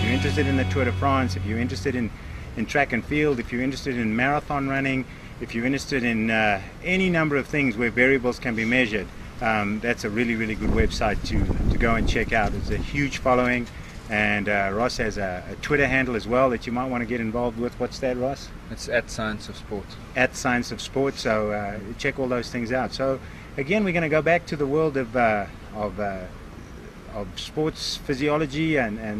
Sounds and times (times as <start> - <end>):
Speech: 0.0 - 26.4, 27.1 - 29.1
Outside, urban or manmade: 0.0 - 29.1.